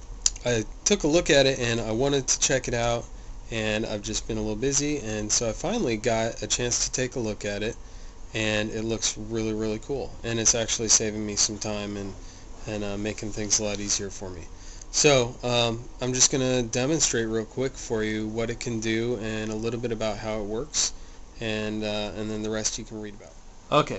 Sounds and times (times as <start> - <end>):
Speech: 0.3 - 7.8, 8.4 - 23.9.